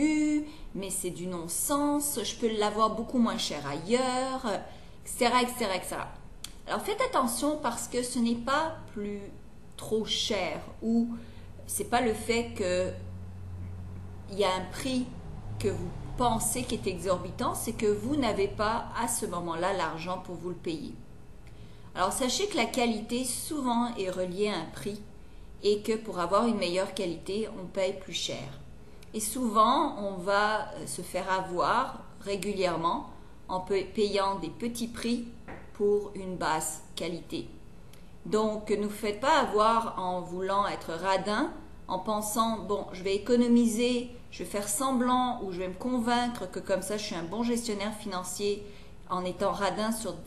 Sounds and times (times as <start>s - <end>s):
Speech: 0.0s - 13.1s, 14.3s - 21.0s, 22.0s - 37.6s, 38.3s - 50.2s.